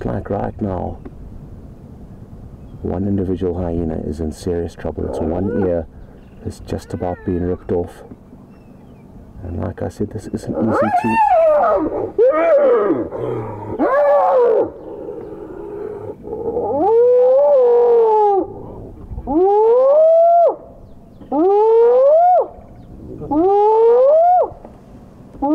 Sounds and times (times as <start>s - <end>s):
Speech: 0.0s - 1.0s, 2.8s - 8.1s, 9.4s - 11.3s
Roaring cats (lions, tigers): 10.5s - 20.0s.